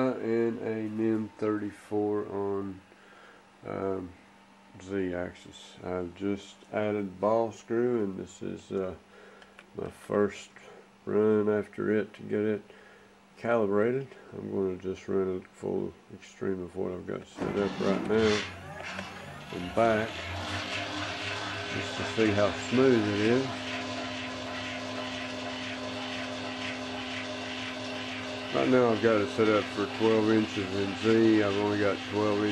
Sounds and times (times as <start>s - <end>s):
Speech: 0.0s - 2.8s, 3.6s - 9.0s, 9.8s - 12.7s, 13.4s - 18.5s, 19.5s - 20.2s, 21.7s - 23.6s, 28.5s - 32.5s.